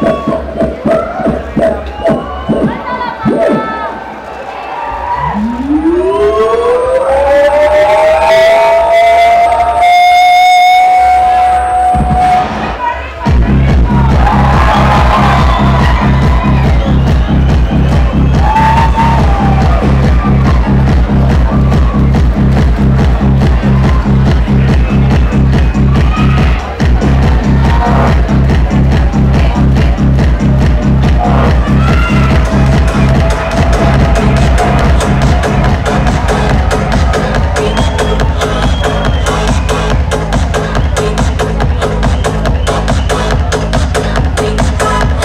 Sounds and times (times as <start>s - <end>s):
Disco: 0.0s - 4.0s, 5.1s - 45.2s.